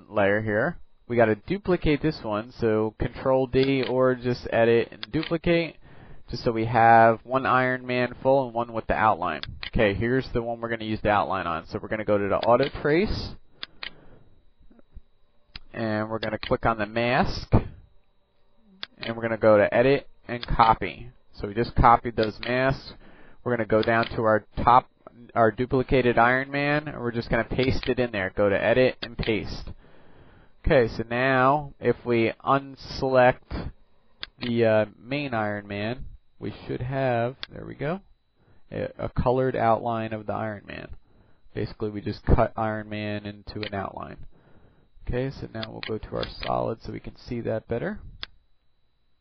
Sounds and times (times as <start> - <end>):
Speech: 0.0 - 13.4, 15.7 - 17.7, 18.8 - 29.8, 30.6 - 33.8, 34.4 - 38.1, 38.7 - 41.0, 41.6 - 44.3, 45.0 - 48.1.